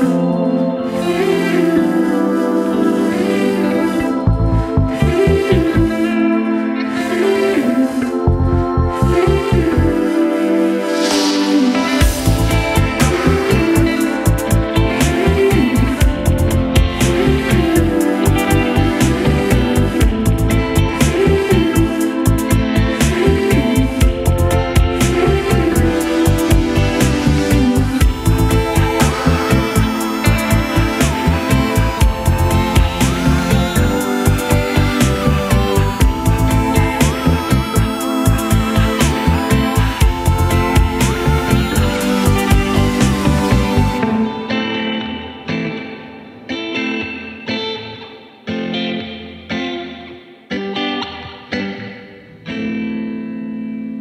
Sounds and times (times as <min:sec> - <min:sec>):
Echo: 0:00.0 - 0:54.0
Music: 0:00.0 - 0:54.0.